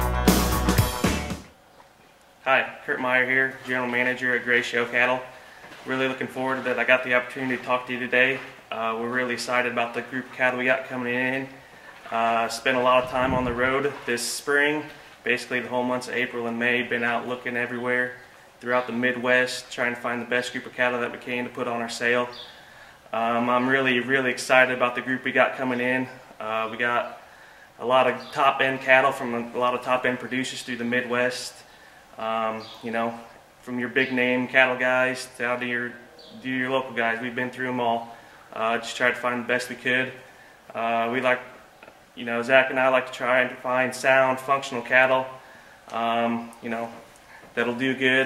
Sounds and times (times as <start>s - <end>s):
Speech: 2.4s - 22.4s, 23.1s - 27.2s, 27.8s - 41.6s, 42.2s - 48.2s.